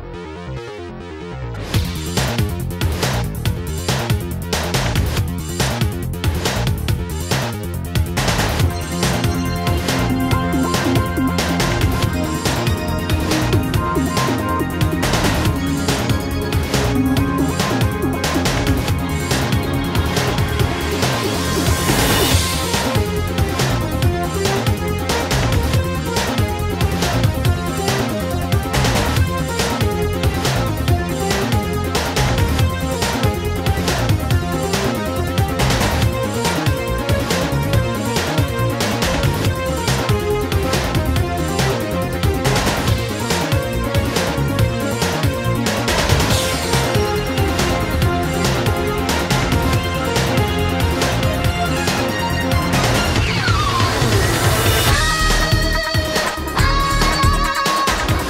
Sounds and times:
Pop music: 1.7 - 58.3.

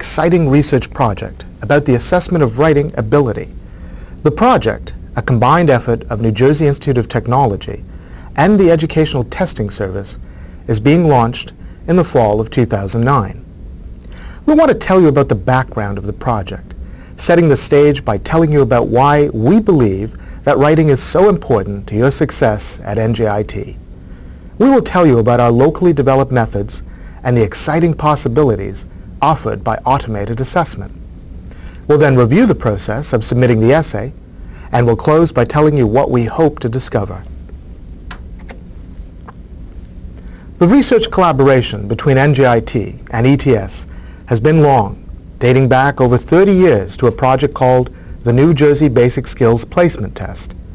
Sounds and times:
Speech: 0.0 - 3.6, 4.2 - 13.4, 14.4 - 23.8, 24.6 - 31.0, 31.9 - 37.3, 40.6 - 50.6.

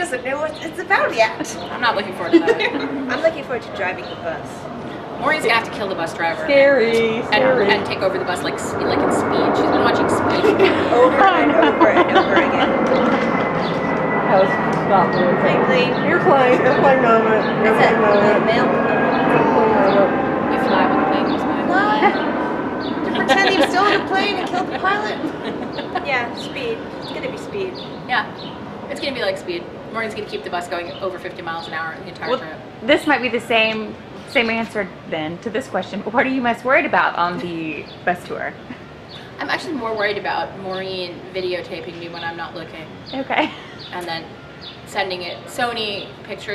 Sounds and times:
Speech: 0.0 - 4.6, 5.2 - 13.2, 14.3 - 22.3, 23.0 - 28.3, 28.9 - 38.6, 39.4 - 44.3.

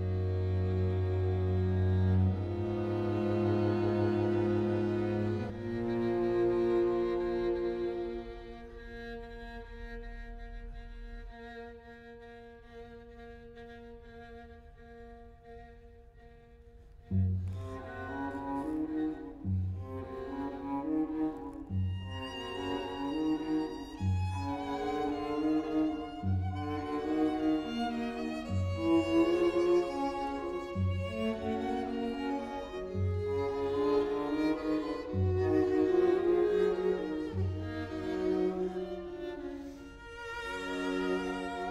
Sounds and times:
Cello: 0.0 - 41.7.

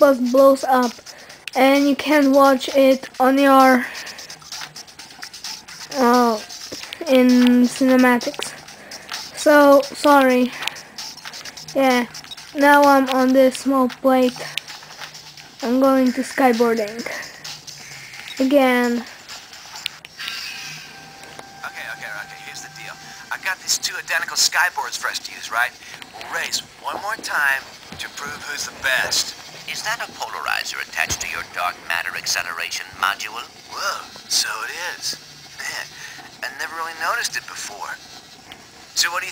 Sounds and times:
Music: 0.0 - 39.3.

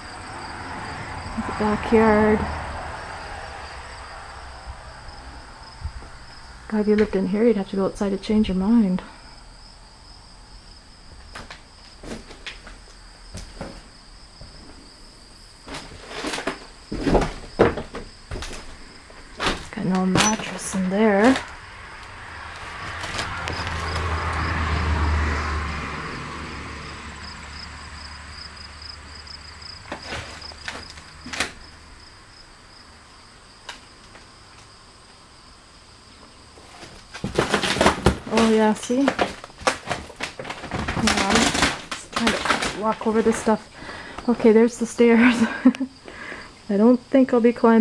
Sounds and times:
Speech: 1.4 - 2.5, 6.7 - 9.1, 19.7 - 21.4, 38.3 - 39.2, 41.0 - 43.6, 44.3 - 45.4, 46.7 - 47.8.

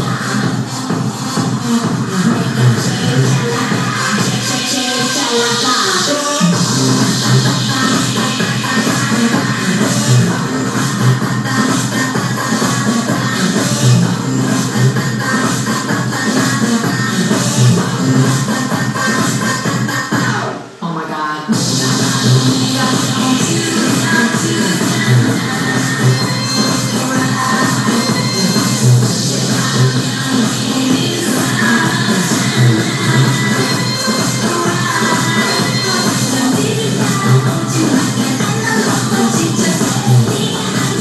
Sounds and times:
Music: 0.0 - 41.0.

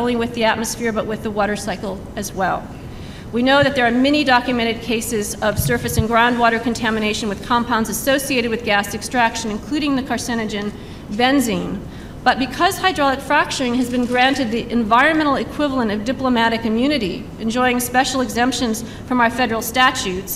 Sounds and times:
Speech: 0.0 - 2.7, 3.4 - 20.3.

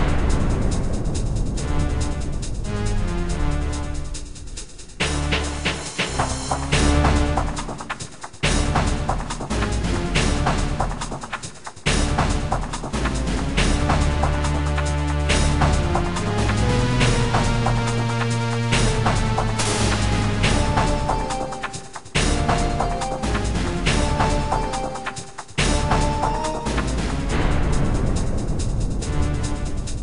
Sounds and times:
Music: 0.0 - 30.0.

